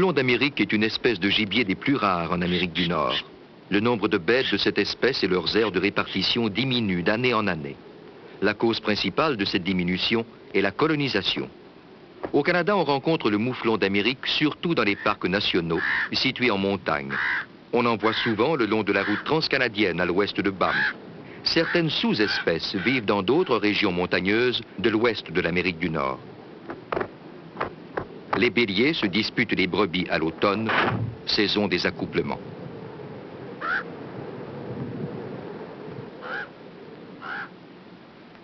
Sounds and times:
Speech: 0:00.0 - 0:07.8, 0:08.4 - 0:11.6, 0:12.3 - 0:26.2, 0:28.4 - 0:32.4
Animal: 0:15.8 - 0:16.2, 0:17.1 - 0:19.4, 0:20.6 - 0:21.0, 0:21.6 - 0:23.8, 0:33.6 - 0:33.9, 0:36.2 - 0:36.6, 0:37.2 - 0:37.6.

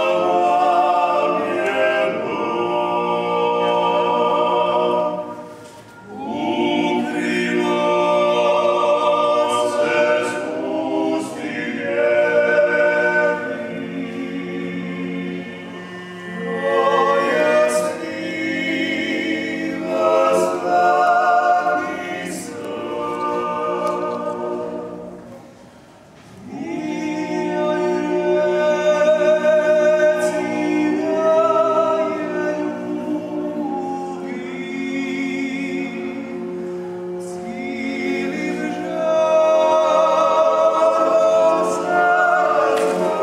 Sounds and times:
Choir: 0:00.0 - 0:43.2.

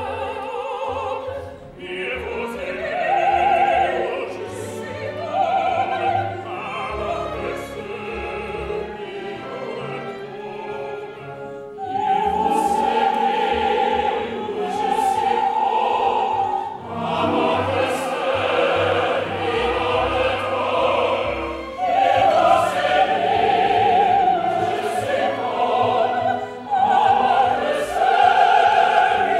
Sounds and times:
Opera: 0:00.0 - 0:29.4.

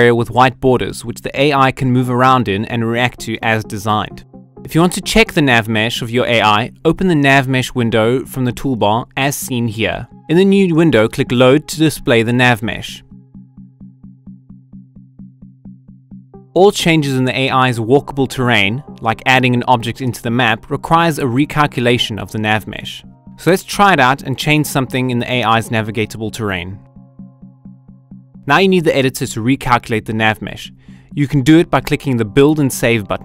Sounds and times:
Speech: 0:00.0 - 0:13.0, 0:16.6 - 0:26.8, 0:28.5 - 0:33.2
Music: 0:00.0 - 0:33.2.

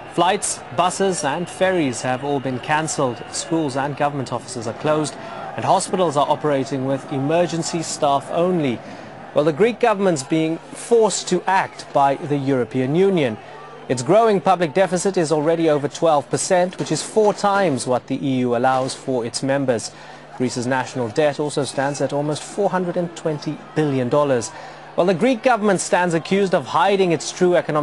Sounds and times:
Speech: 0:00.0 - 0:08.8, 0:09.4 - 0:27.8.

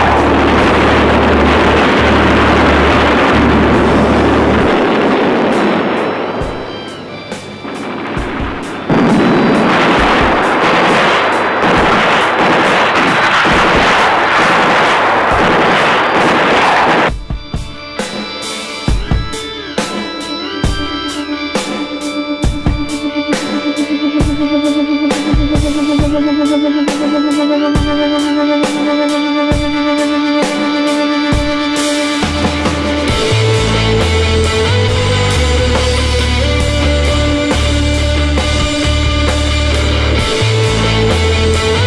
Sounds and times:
Explosion: 0:00.0 - 0:17.1.

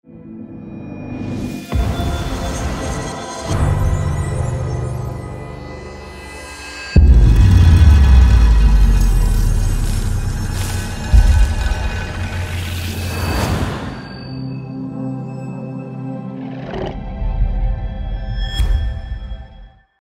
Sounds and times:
Music: 0:00.0 - 0:20.0.

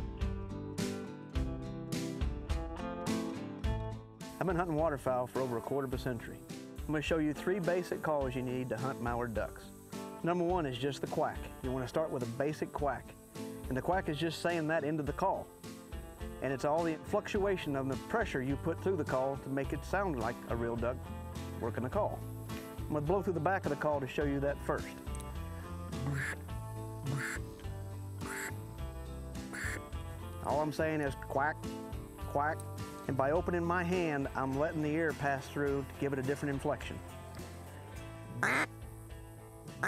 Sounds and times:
Music: 0:00.0 - 0:39.8
Speech: 0:04.4 - 0:15.5, 0:16.4 - 0:21.0, 0:21.6 - 0:22.2, 0:22.9 - 0:25.0, 0:30.4 - 0:31.6, 0:32.3 - 0:37.0.

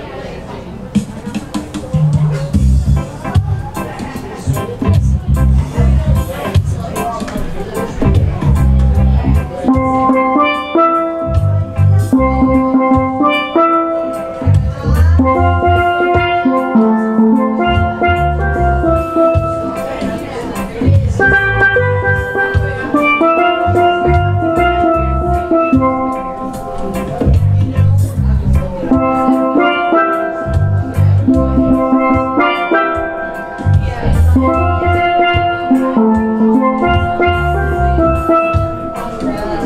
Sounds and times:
Drum: 0:01.0 - 0:39.6
Steelpan: 0:01.1 - 0:39.6.

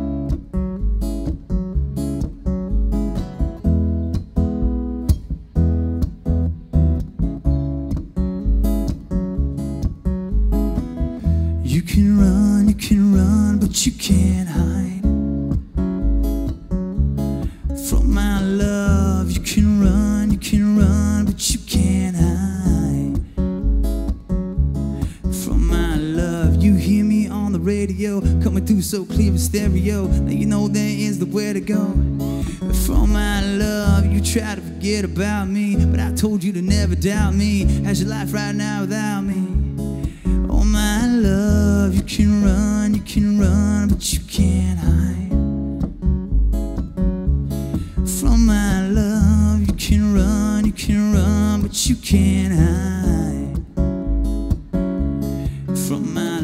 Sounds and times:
Music: 0:00.0 - 0:56.4.

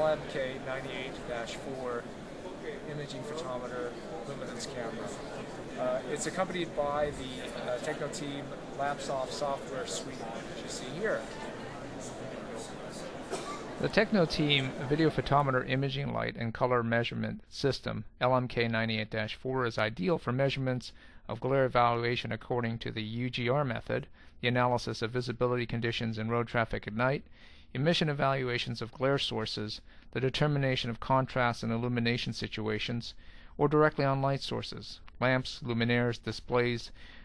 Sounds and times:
Speech: 0:00.0 - 0:27.2, 0:27.8 - 0:37.0.

